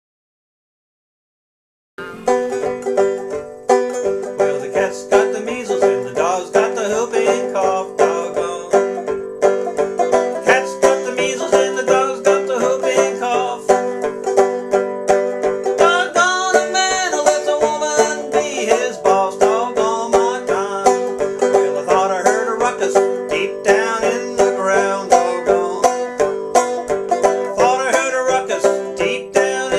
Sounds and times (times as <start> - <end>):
Music: 2.0 - 29.7.